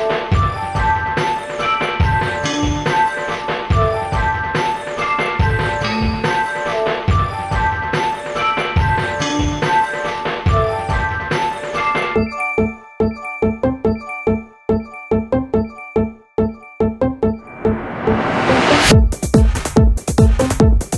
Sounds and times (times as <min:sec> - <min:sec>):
Music: 0:00.0 - 0:20.9
Sound effect: 0:16.9 - 0:19.0.